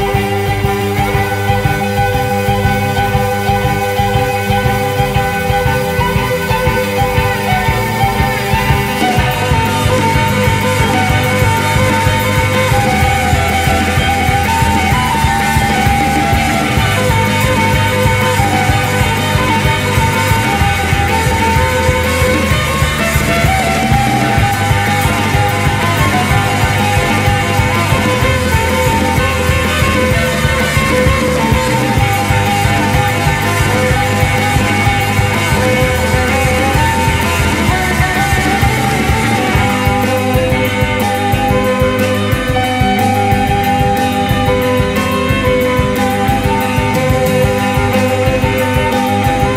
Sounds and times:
Rock and roll: 0.0 - 49.5
Wedding music: 0.0 - 49.5.

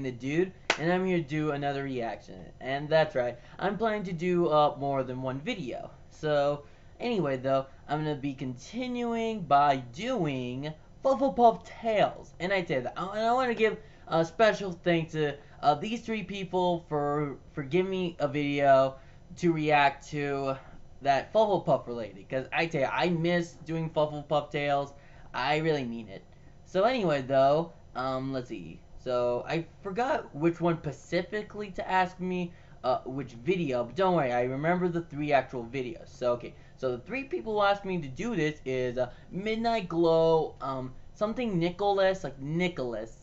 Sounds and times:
Speech: 0.0 - 43.2.

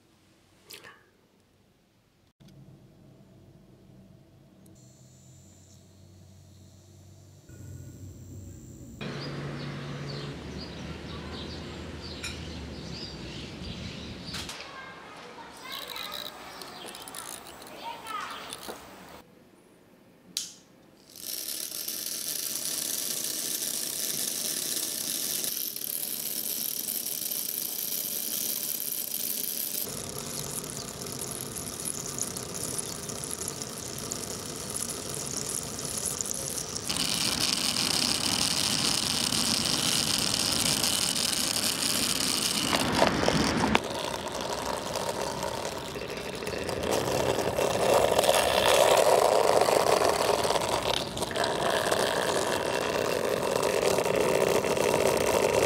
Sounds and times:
Chirp, tweet: 9.1 - 14.4.

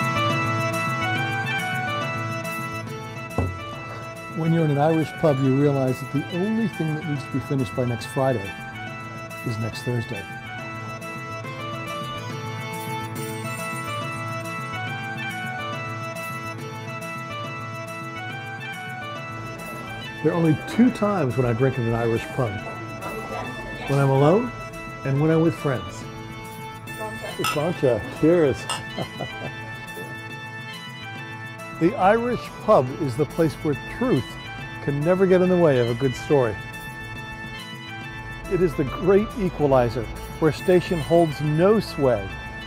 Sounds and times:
Music: 0.0 - 42.6.

